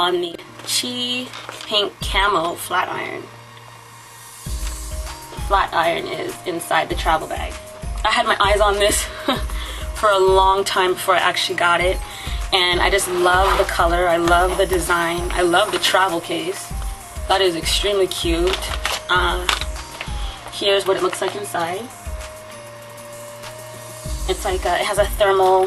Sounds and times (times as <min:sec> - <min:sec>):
Speech: 0:00.0 - 0:03.3, 0:05.5 - 0:09.1, 0:10.0 - 0:16.7, 0:17.3 - 0:19.6, 0:20.6 - 0:21.9, 0:24.3 - 0:25.6
Music: 0:00.0 - 0:25.6.